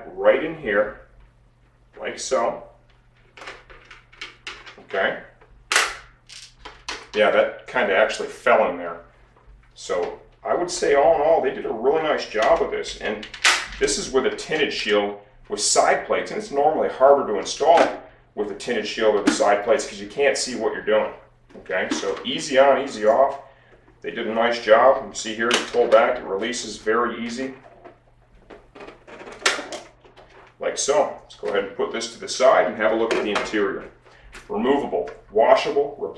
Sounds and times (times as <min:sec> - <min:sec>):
Speech: 0:00.0 - 0:01.1, 0:02.0 - 0:02.8, 0:04.8 - 0:05.4, 0:07.1 - 0:09.1, 0:09.8 - 0:27.6, 0:30.6 - 0:36.1.